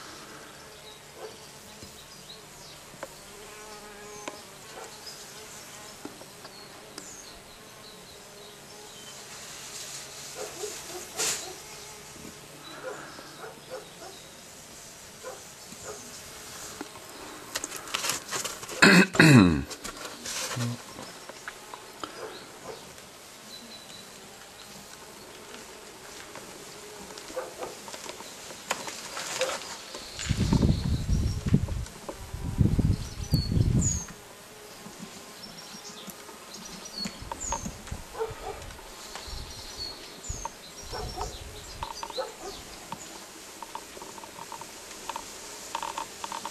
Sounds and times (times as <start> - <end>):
Chirp, tweet: 6.4 - 9.2, 29.6 - 31.5, 32.8 - 34.2, 35.3 - 37.8, 39.1 - 43.2.